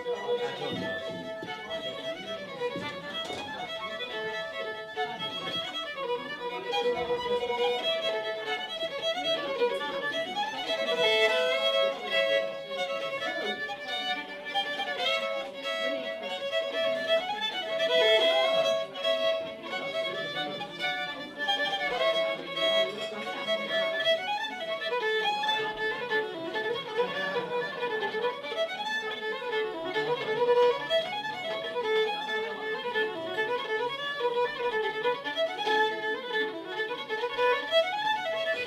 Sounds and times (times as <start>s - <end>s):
Violin, fiddle: 0.0s - 38.6s.